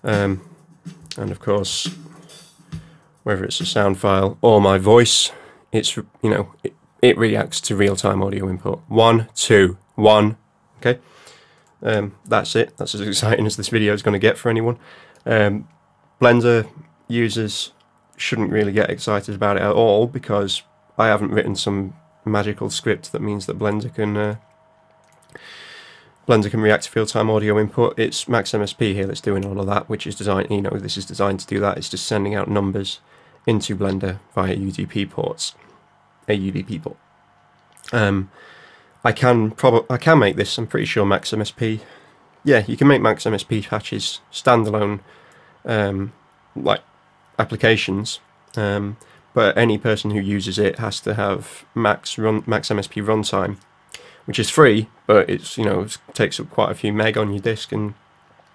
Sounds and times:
Speech: 0:00.0 - 0:00.5, 0:01.1 - 0:02.0, 0:03.2 - 0:11.0, 0:11.8 - 0:24.4, 0:26.3 - 0:35.7, 0:36.3 - 0:37.0, 0:37.8 - 0:38.4, 0:39.0 - 0:58.0.

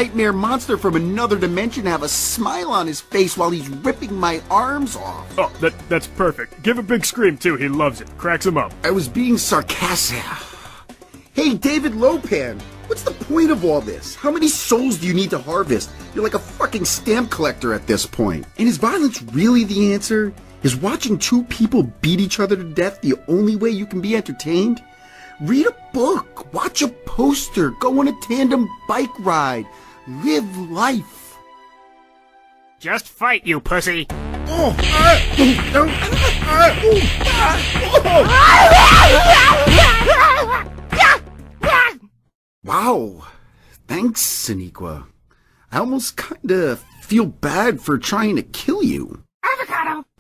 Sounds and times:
Speech: 0:00.0 - 0:05.3, 0:05.9 - 0:10.4, 0:11.4 - 0:24.8, 0:25.4 - 0:31.4, 0:32.8 - 0:40.3, 0:42.7 - 0:45.1, 0:45.7 - 0:50.2
Music: 0:00.0 - 0:42.0.

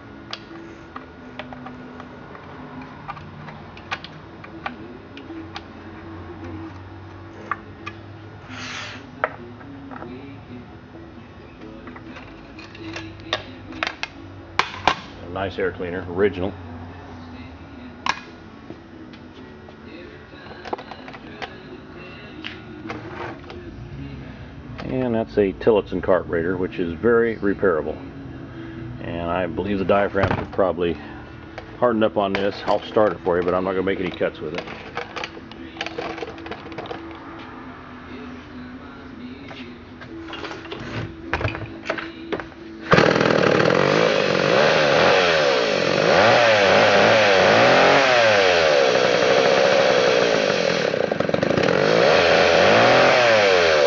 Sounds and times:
Music: 0:00.0 - 0:53.8
Chainsaw: 0:42.9 - 0:53.8.

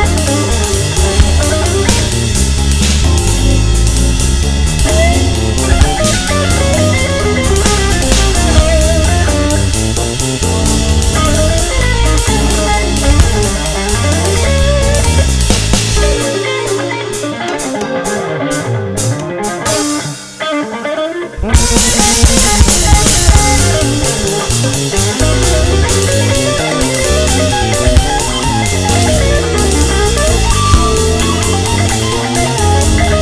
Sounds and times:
Strum: 0:00.0 - 0:20.2, 0:21.4 - 0:33.2
Electric guitar: 0:00.0 - 0:33.2.

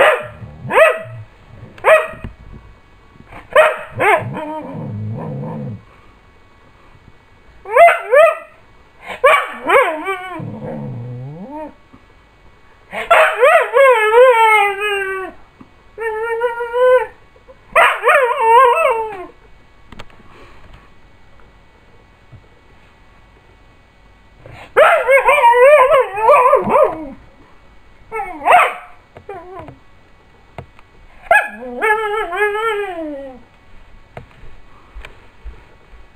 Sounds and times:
Bow-wow: 0:00.0 - 0:01.2, 0:03.5 - 0:04.4, 0:07.7 - 0:10.0, 0:13.0 - 0:13.6, 0:28.4 - 0:29.0, 0:31.2 - 0:31.7
Yip: 0:00.0 - 0:01.2, 0:01.8 - 0:02.2, 0:03.5 - 0:04.4, 0:07.7 - 0:08.6, 0:09.2 - 0:10.0, 0:13.0 - 0:13.8, 0:17.8 - 0:18.9, 0:24.8 - 0:27.0, 0:28.2 - 0:29.0, 0:31.2 - 0:32.3.

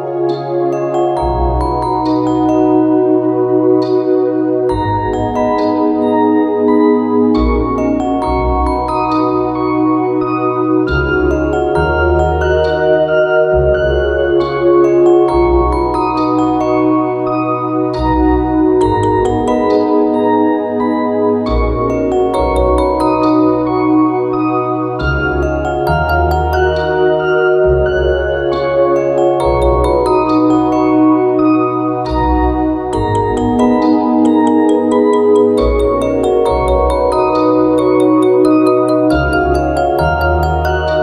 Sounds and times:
Marimba, xylophone: 0:00.0 - 0:41.0.

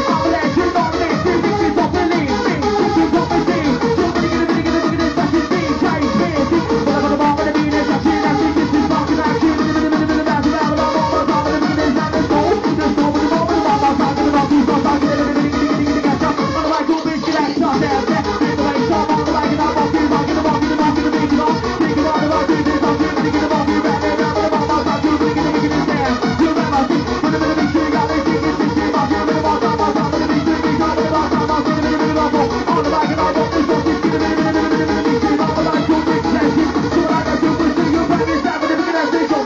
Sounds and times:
Music: 0:00.0 - 0:39.4.

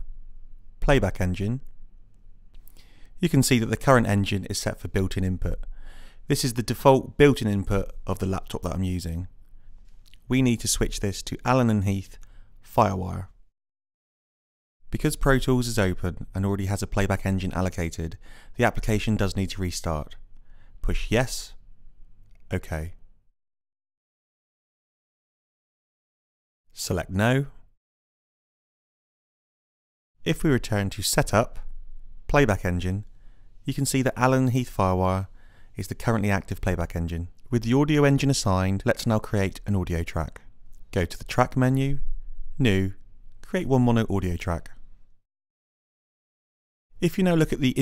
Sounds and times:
Speech: 0:00.8 - 0:01.7, 0:03.2 - 0:05.7, 0:06.3 - 0:09.3, 0:10.2 - 0:13.4, 0:14.9 - 0:20.2, 0:20.8 - 0:21.6, 0:22.5 - 0:23.0, 0:26.8 - 0:27.6, 0:30.3 - 0:31.7, 0:32.3 - 0:33.1, 0:33.7 - 0:42.0, 0:42.6 - 0:44.8, 0:47.0 - 0:47.8.

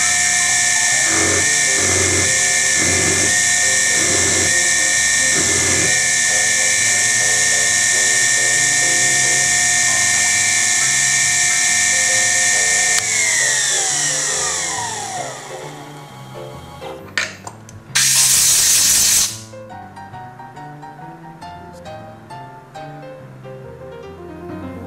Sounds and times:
Music: 0:00.0 - 0:24.8.

